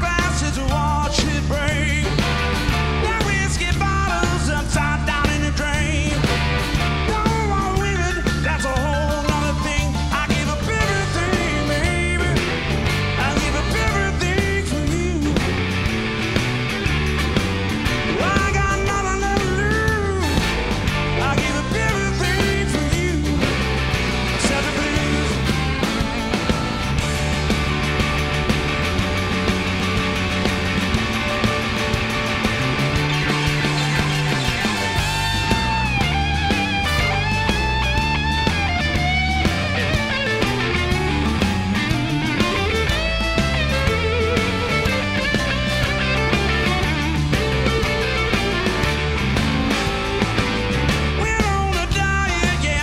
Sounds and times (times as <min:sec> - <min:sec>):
Exciting music: 0:00.0 - 0:52.8.